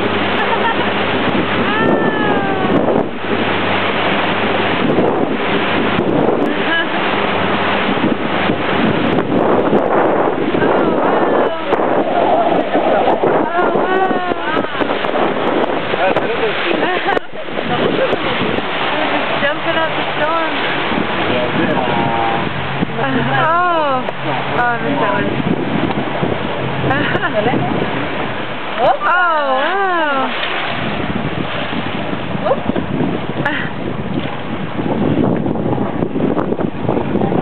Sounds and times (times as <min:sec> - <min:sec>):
Boat, Water vehicle: 0:00.0 - 0:37.4
Ocean: 0:00.0 - 0:37.4.